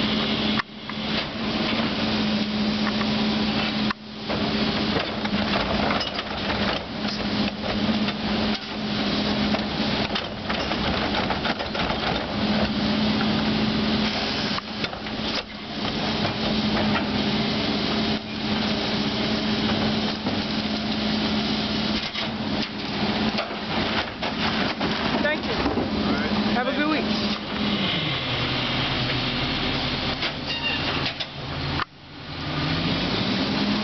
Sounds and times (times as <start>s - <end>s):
Truck: 0.0s - 33.8s
Speech: 25.2s - 27.1s.